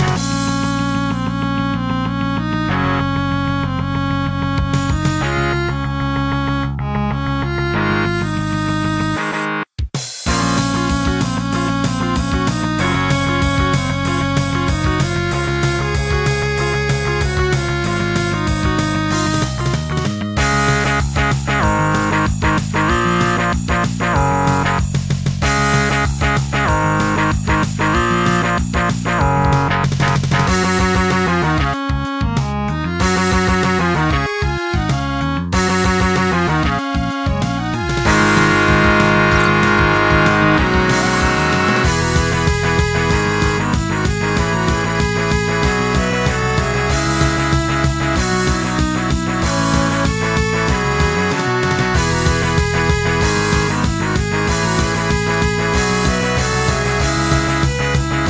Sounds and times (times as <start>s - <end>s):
Music: 0.0s - 58.3s.